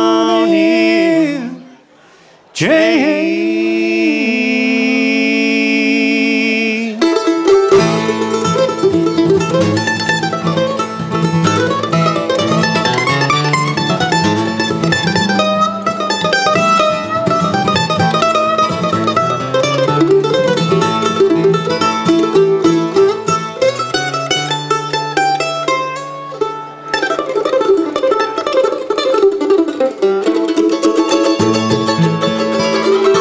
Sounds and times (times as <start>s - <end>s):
Mandolin: 0.0s - 4.9s, 6.4s - 33.2s.